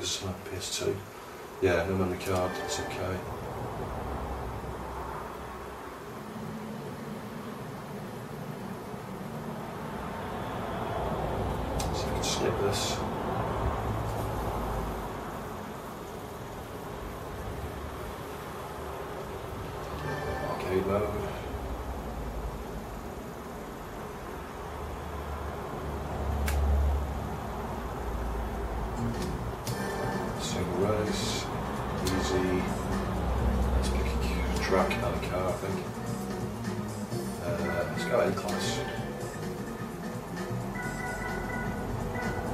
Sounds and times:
Speech: 0.0 - 3.3, 11.9 - 13.1, 20.2 - 21.5, 30.4 - 32.8, 33.8 - 35.9, 37.4 - 39.0.

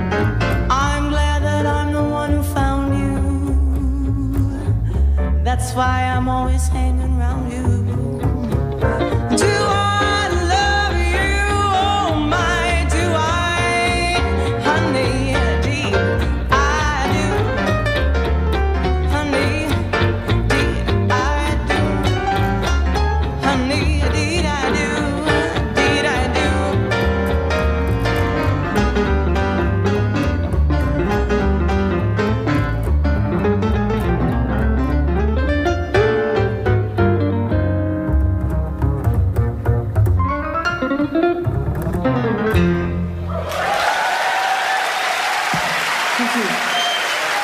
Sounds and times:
Jazz: 0.0 - 43.8
Inside, large room or hall: 0.0 - 47.4.

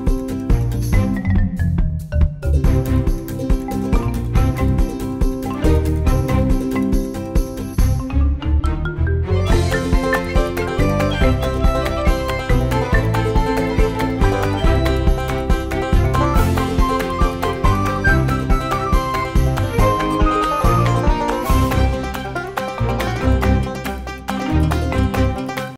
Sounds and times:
Music: 0.0 - 25.7.

